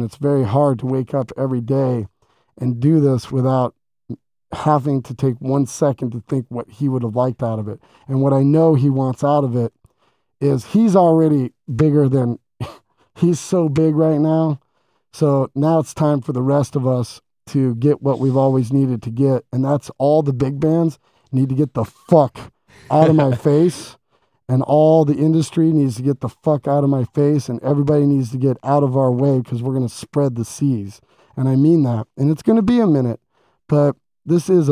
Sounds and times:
Speech: 0.0 - 3.8, 4.5 - 9.8, 10.4 - 14.6, 15.2 - 34.7.

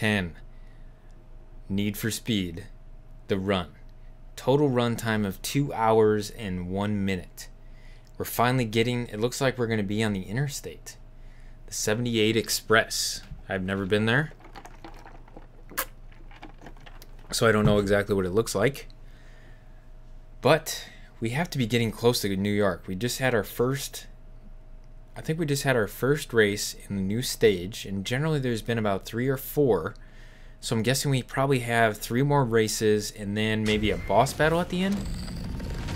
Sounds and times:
Speech: 0.0 - 0.4, 1.7 - 3.8, 4.4 - 7.6, 8.2 - 11.0, 11.7 - 14.4, 17.3 - 18.9, 20.4 - 24.2, 25.2 - 30.0, 30.6 - 35.0.

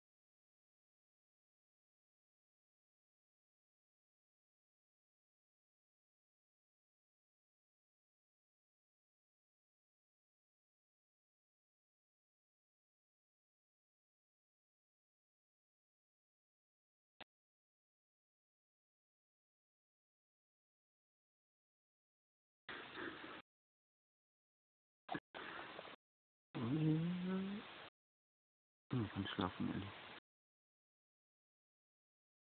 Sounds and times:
Speech: 26.6 - 27.6, 28.9 - 30.0.

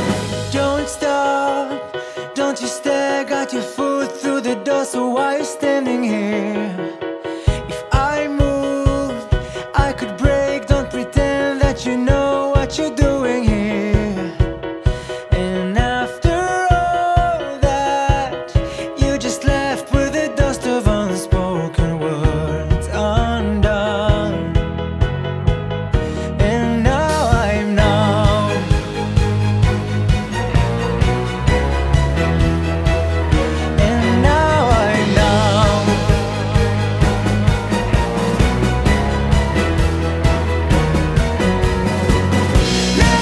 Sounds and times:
Music: 0.0 - 43.2.

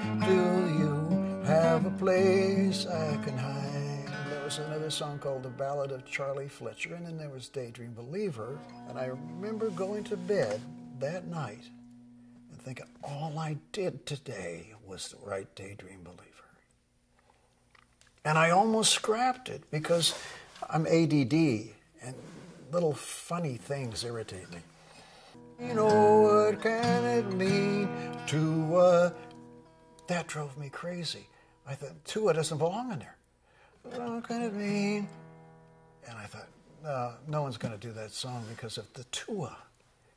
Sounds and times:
Speech: 4.4 - 11.8, 12.5 - 16.7, 18.2 - 24.7, 30.1 - 33.2, 36.0 - 39.8.

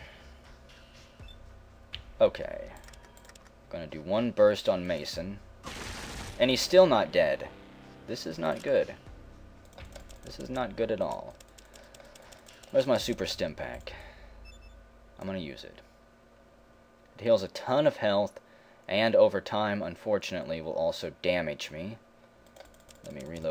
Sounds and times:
Music: 0.0 - 3.5, 4.9 - 13.7
Speech: 2.2 - 2.8, 3.7 - 5.4, 6.4 - 7.5, 8.1 - 9.0, 10.3 - 11.4, 12.7 - 14.0, 15.2 - 15.8, 17.2 - 22.0, 23.1 - 23.5.

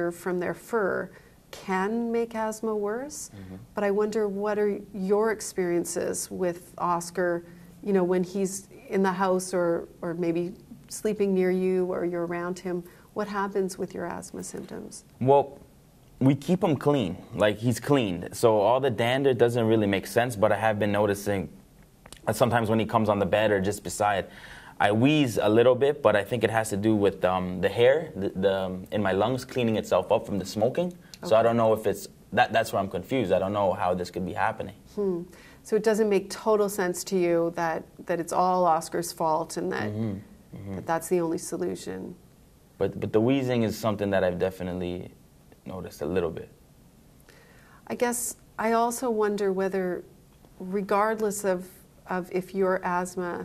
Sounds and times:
Conversation: 0.0 - 53.4.

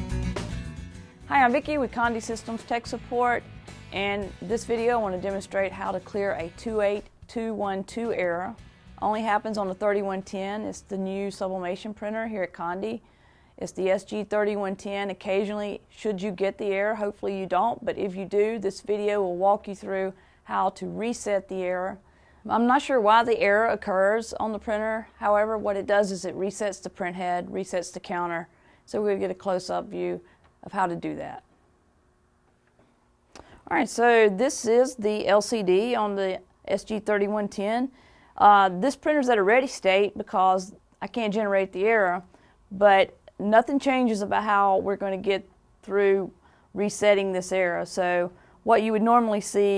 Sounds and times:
Speech: 1.3 - 13.0, 13.6 - 31.4, 33.6 - 49.7.

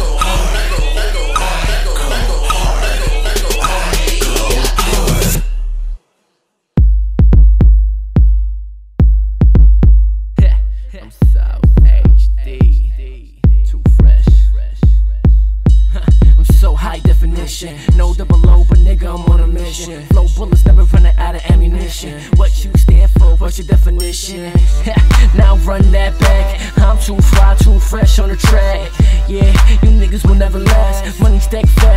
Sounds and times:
Music: 0.0 - 31.9.

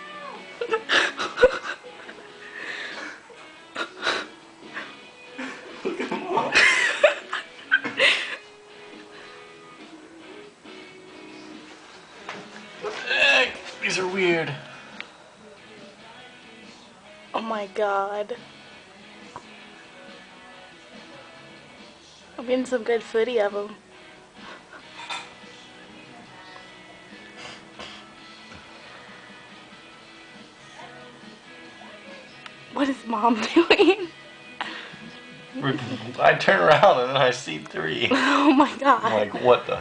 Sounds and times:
Music: 0.0 - 39.8.

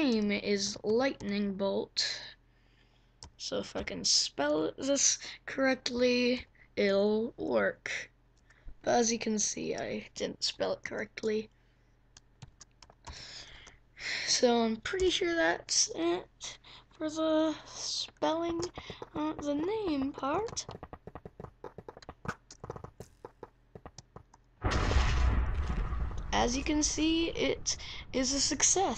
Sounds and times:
Speech: 0.0 - 2.4, 3.4 - 8.1, 8.8 - 11.5, 14.2 - 20.7, 26.3 - 28.9.

